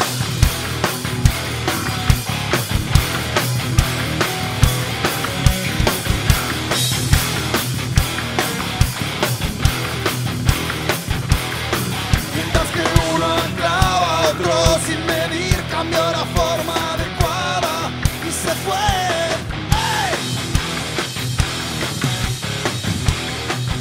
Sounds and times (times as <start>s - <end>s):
Rhythm and blues: 0.0s - 23.8s
Dance music: 4.9s - 6.7s, 12.3s - 17.4s.